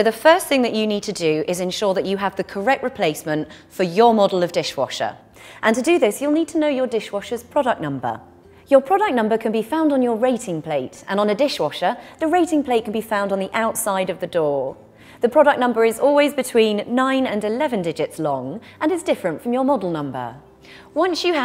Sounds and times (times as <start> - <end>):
Speech: 0.0 - 20.4, 21.0 - 21.4.